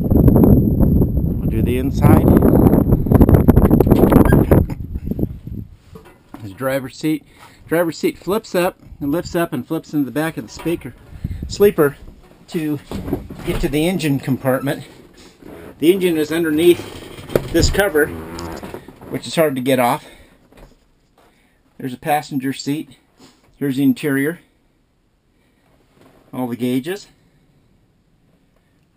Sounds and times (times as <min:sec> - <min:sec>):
Speech: 0:01.4 - 0:02.6, 0:06.4 - 0:15.0, 0:15.8 - 0:16.9, 0:17.5 - 0:18.2, 0:19.1 - 0:20.1, 0:21.8 - 0:23.0, 0:23.6 - 0:24.5, 0:26.3 - 0:27.2.